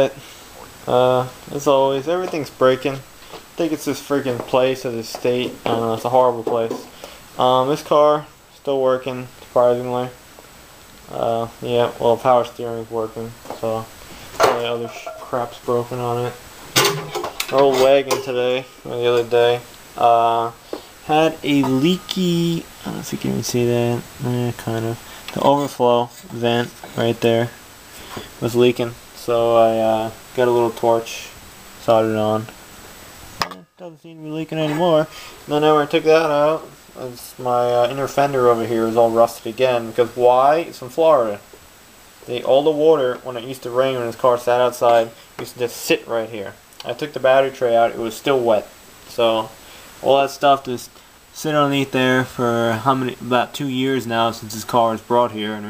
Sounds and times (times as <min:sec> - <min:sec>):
Speech: 0:00.0 - 0:00.2, 0:00.9 - 0:10.2, 0:11.1 - 0:16.4, 0:17.4 - 0:27.6, 0:28.4 - 0:32.6, 0:33.8 - 0:41.5, 0:42.2 - 0:55.7.